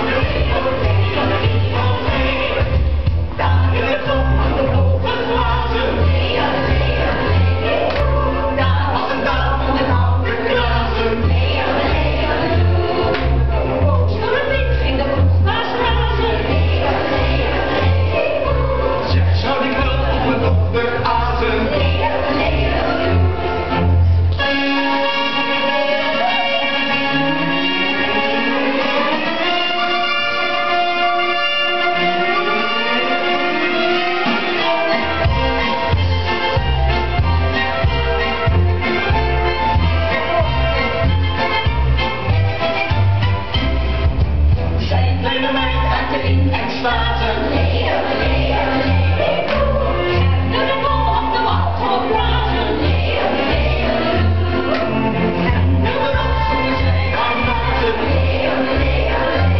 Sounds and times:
Exciting music: 0.0 - 59.5.

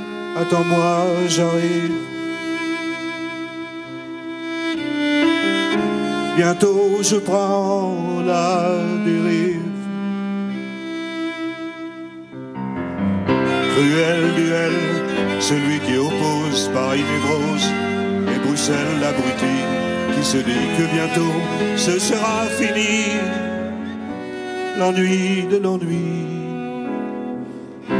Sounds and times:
Bowed string instrument: 0.0 - 27.9.

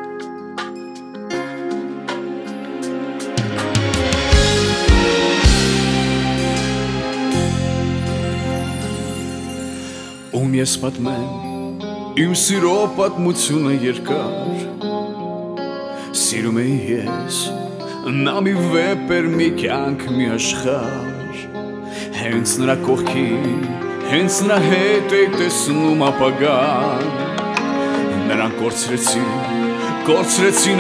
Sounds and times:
Music: 0.0 - 30.8.

